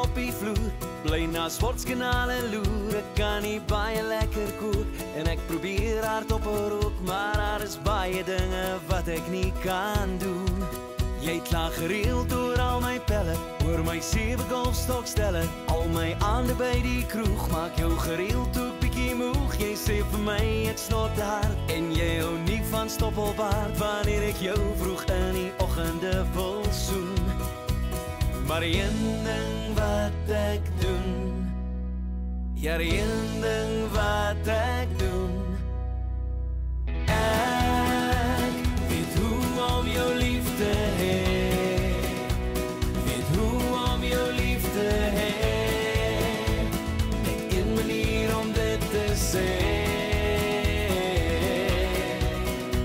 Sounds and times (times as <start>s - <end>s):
Music: 0.0s - 52.8s.